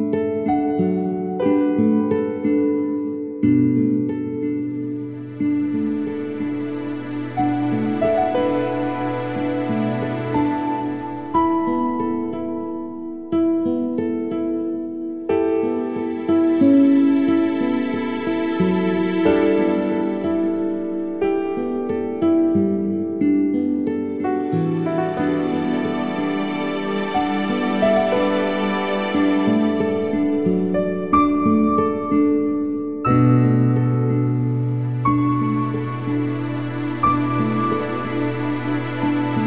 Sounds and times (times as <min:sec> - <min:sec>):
Music: 0:00.0 - 0:39.4.